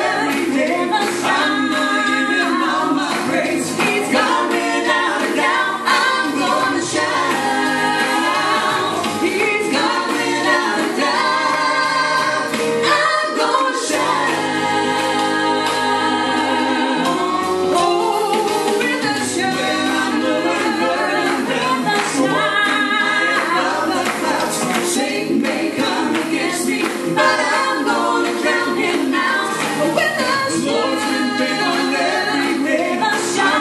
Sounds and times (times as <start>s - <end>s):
Choir: 0.0s - 33.6s.